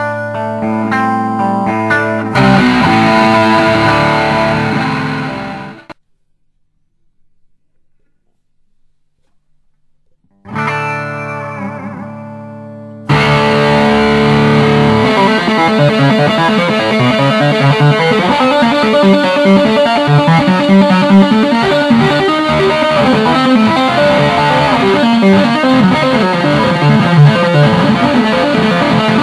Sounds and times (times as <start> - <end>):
Tapping (guitar technique): 1.9 - 6.0, 13.1 - 29.2.